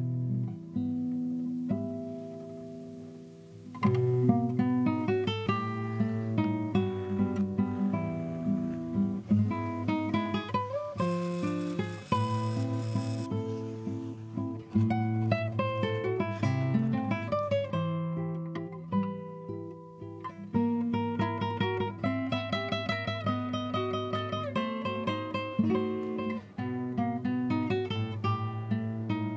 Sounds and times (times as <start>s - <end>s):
Acoustic guitar: 0.0s - 29.3s.